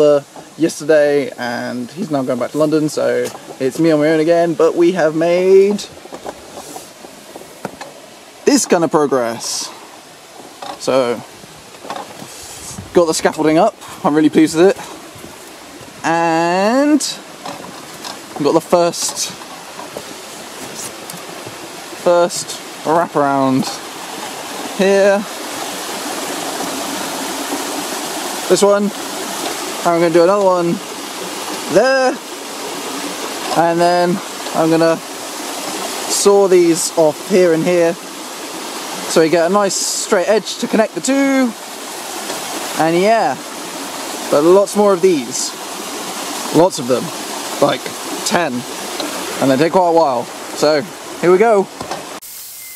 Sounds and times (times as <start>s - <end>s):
Speech: 0.0s - 5.9s, 8.5s - 9.8s, 10.8s - 11.3s, 12.9s - 14.8s, 16.0s - 17.2s, 18.4s - 19.4s, 22.0s - 23.8s, 24.8s - 25.3s, 28.5s - 29.0s, 29.8s - 30.8s, 31.7s - 32.2s, 33.5s - 35.0s, 36.1s - 38.0s, 39.1s - 41.6s, 42.8s - 43.4s, 44.3s - 45.6s, 46.5s - 48.7s, 49.4s - 51.7s.